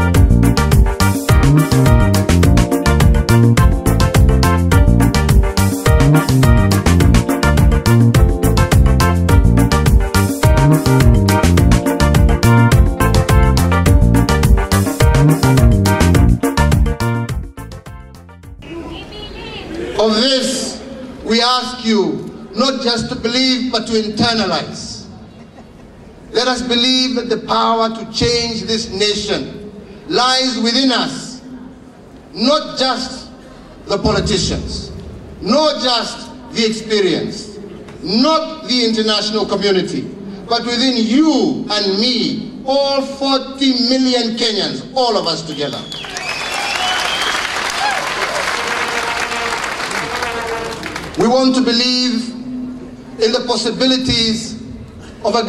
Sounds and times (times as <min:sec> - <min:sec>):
Male speech, man speaking: 0:19.9 - 0:25.1, 0:26.4 - 0:31.4, 0:32.4 - 0:33.3, 0:33.9 - 0:45.9, 0:51.2 - 0:52.5, 0:53.2 - 0:55.4.